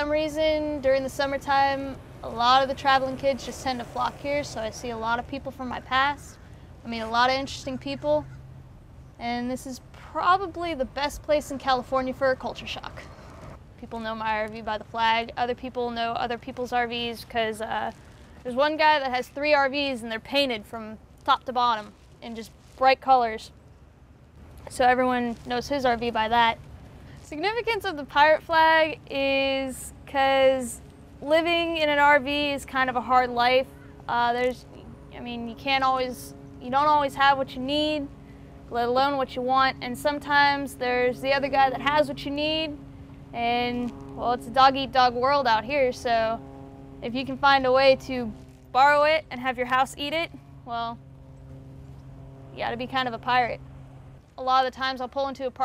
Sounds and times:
Speech: 0:00.0 - 0:08.2, 0:09.2 - 0:13.0, 0:13.8 - 0:23.5, 0:24.7 - 0:26.6, 0:27.3 - 0:38.1, 0:38.7 - 0:42.8, 0:43.4 - 0:46.4, 0:47.0 - 0:51.0, 0:52.6 - 0:53.6, 0:54.4 - 0:55.6.

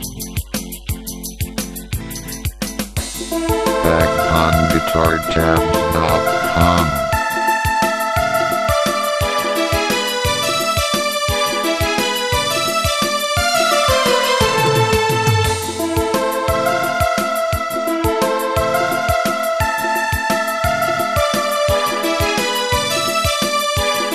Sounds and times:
Musical instrument: 0:03.4 - 0:07.4
Speech: 0:03.8 - 0:07.1.

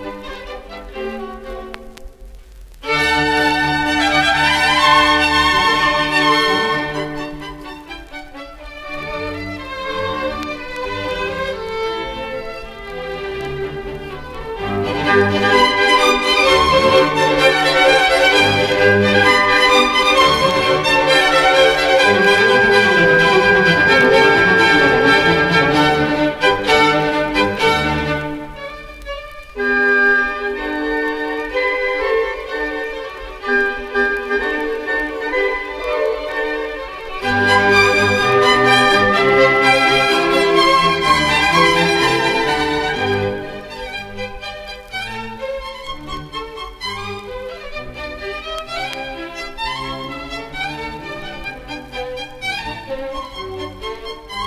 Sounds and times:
Violin, fiddle: 0:00.0 - 0:54.4.

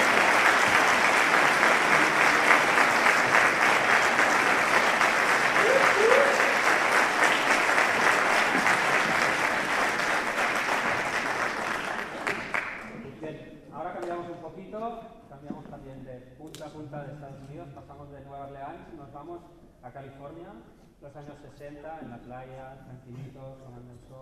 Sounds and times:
Applause: 0:00.0 - 0:13.1.

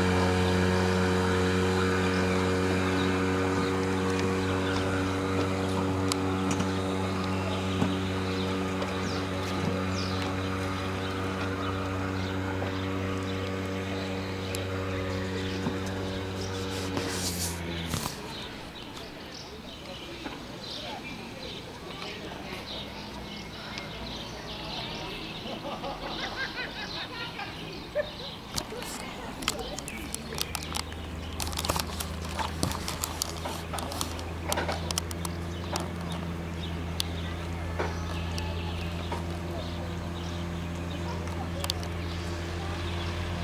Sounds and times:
Motorboat, speedboat: 0:00.0 - 0:43.4.

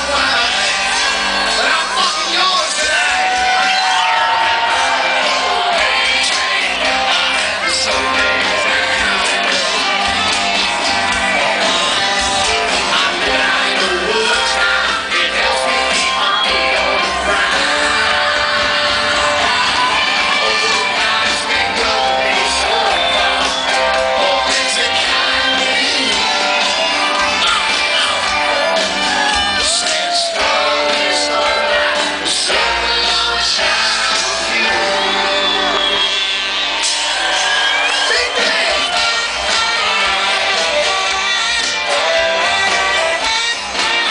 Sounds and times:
Crowd: 0:00.0 - 0:44.1
Musical instrument: 0:00.0 - 0:44.1
Rock music: 0:00.0 - 0:44.1
Singing: 0:00.0 - 0:44.1.

